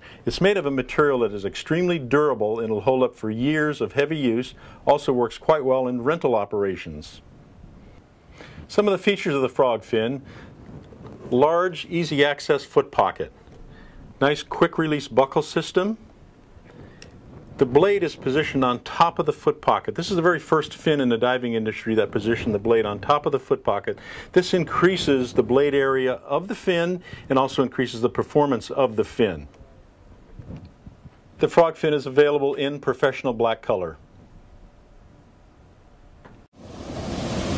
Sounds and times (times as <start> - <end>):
Speech: 0.2 - 7.2, 8.7 - 10.3, 11.3 - 13.4, 14.2 - 16.1, 17.6 - 29.8, 31.4 - 34.0.